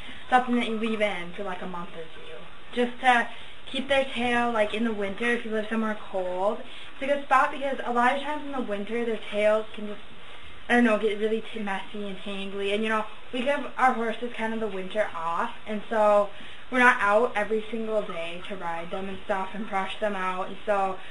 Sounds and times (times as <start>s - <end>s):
Speech: 0.3s - 10.0s, 10.7s - 21.1s.